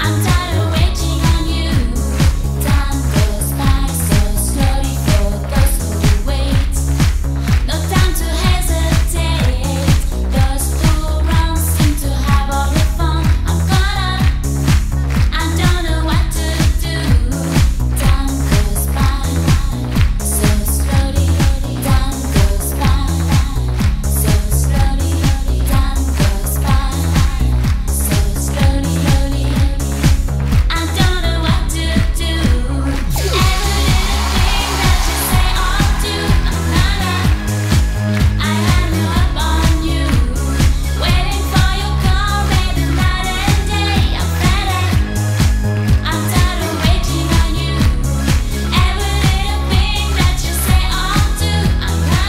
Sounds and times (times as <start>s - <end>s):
Disco: 0.0s - 52.2s
Pop music: 0.0s - 52.2s.